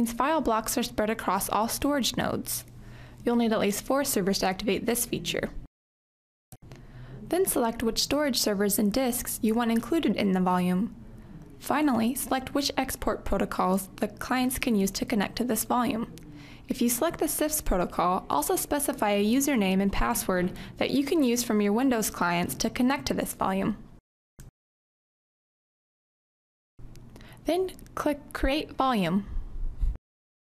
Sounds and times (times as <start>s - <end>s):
Inside, small room: 0.0s - 5.7s, 6.6s - 24.0s
Speech: 0.0s - 5.7s, 7.2s - 11.0s, 11.6s - 23.8s, 27.4s - 29.3s.